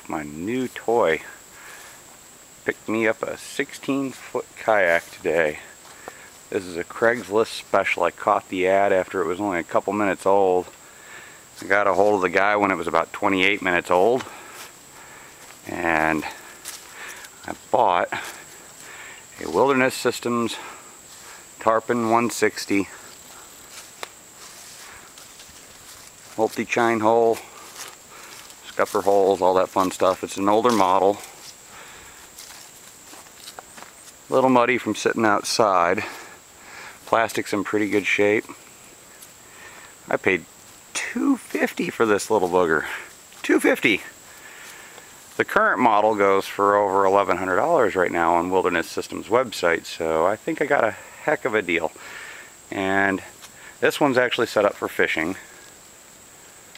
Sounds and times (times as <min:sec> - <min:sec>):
Speech: 0:00.0 - 0:01.4, 0:02.6 - 0:05.8, 0:06.5 - 0:10.8, 0:11.6 - 0:14.4, 0:15.6 - 0:16.5, 0:17.4 - 0:18.4, 0:19.4 - 0:20.8, 0:21.6 - 0:23.1, 0:26.4 - 0:27.6, 0:28.6 - 0:31.4, 0:34.3 - 0:36.4, 0:37.0 - 0:38.6, 0:40.1 - 0:44.2, 0:45.4 - 0:52.0, 0:52.7 - 0:55.6.